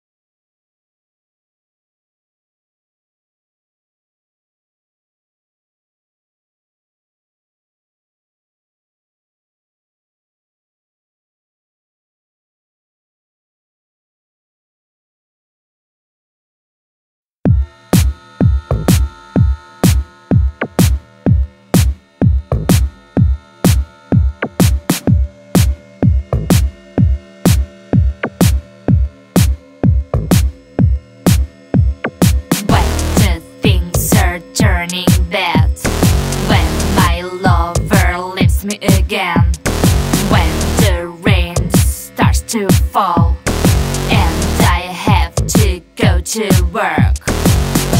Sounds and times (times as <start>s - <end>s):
Soundtrack music: 19.8s - 46.0s, 47.2s - 47.9s.